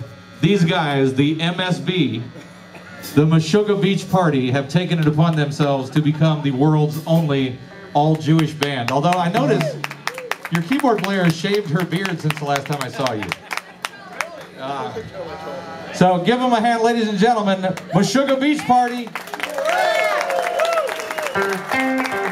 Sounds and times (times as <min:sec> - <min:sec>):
Speech: 0:00.4 - 0:02.3, 0:03.2 - 0:09.8, 0:10.5 - 0:13.3, 0:14.0 - 0:19.2.